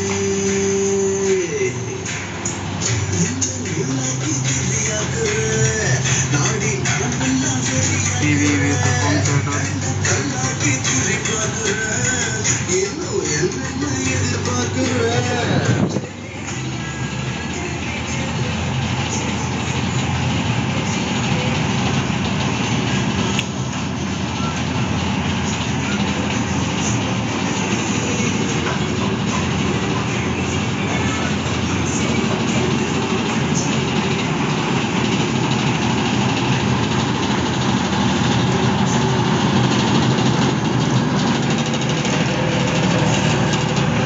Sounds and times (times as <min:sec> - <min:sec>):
Music: 0:00.0 - 0:44.0
Speech: 0:08.3 - 0:10.4.